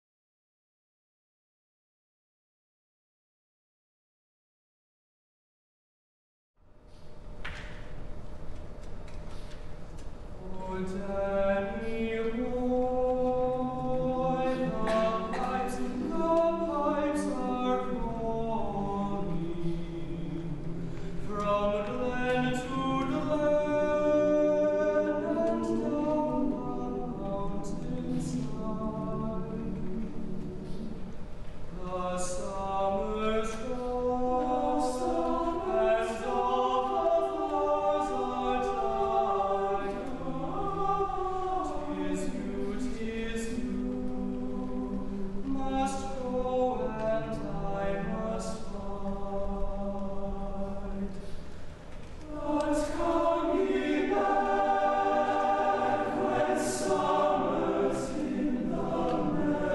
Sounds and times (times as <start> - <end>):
Male singing: 10.4 - 20.6, 21.2 - 30.0, 31.7 - 51.2, 52.3 - 54.2
Choir: 10.4 - 51.2, 52.2 - 59.7.